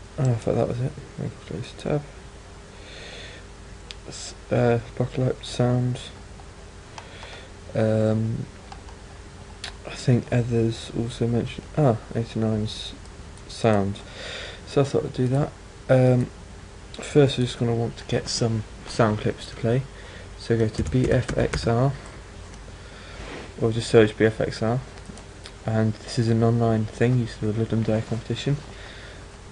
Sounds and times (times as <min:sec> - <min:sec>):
Speech: 0:00.2 - 0:02.2, 0:04.0 - 0:06.2, 0:07.7 - 0:08.5, 0:09.7 - 0:14.1, 0:14.7 - 0:16.4, 0:17.0 - 0:22.0, 0:23.6 - 0:24.9, 0:25.6 - 0:28.7.